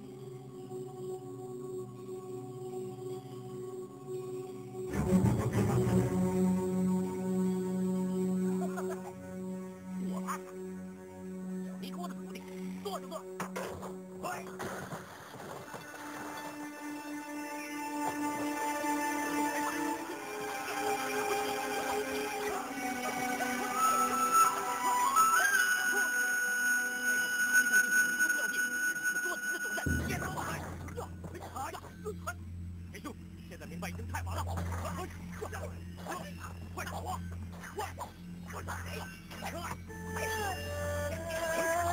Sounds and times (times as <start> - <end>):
Music: 0.0 - 41.9
Speech: 11.8 - 14.6, 28.2 - 32.4, 33.0 - 41.8.